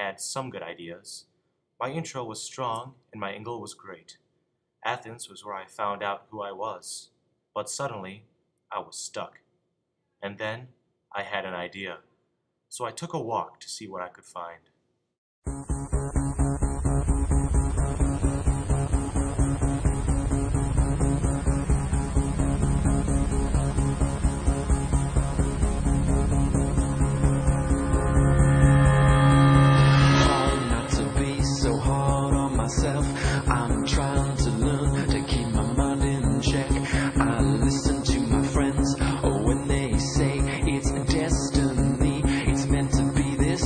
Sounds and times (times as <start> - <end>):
Speech: 0.0 - 4.2, 4.8 - 9.4, 10.2 - 12.1, 12.7 - 14.7
Music: 15.5 - 43.6.